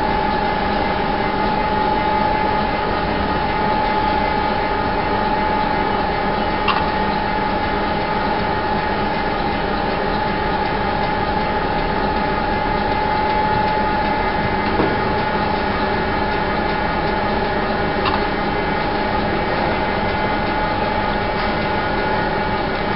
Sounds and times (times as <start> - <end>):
Heavy engine (low frequency): 0.0 - 22.9.